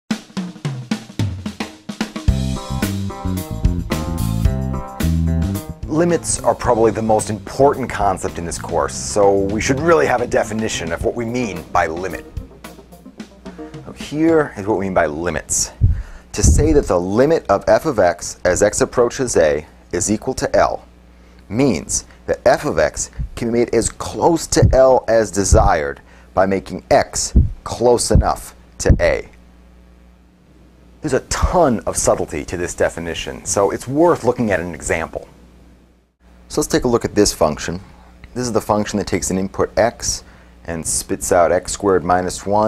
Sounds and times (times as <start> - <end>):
Drum kit: 0.1 - 14.7, 15.7 - 17.0
Bass drum: 0.4 - 6.4, 7.9 - 14.4, 15.8 - 16.9, 23.2 - 23.4, 24.6 - 24.8, 25.5 - 25.8, 27.3 - 29.2
Hi-hat: 2.1 - 14.5.